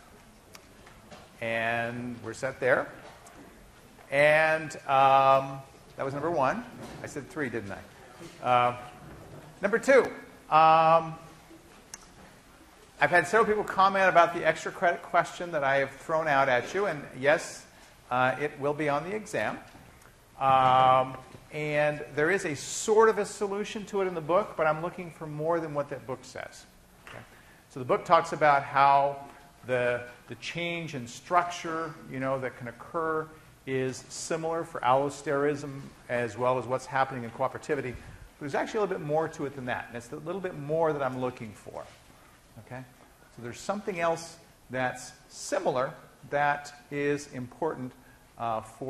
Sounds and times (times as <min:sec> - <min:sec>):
Speech: 0:01.4 - 0:03.0, 0:04.1 - 0:09.0, 0:09.6 - 0:11.3, 0:13.0 - 0:19.7, 0:20.4 - 0:42.0, 0:42.6 - 0:48.9.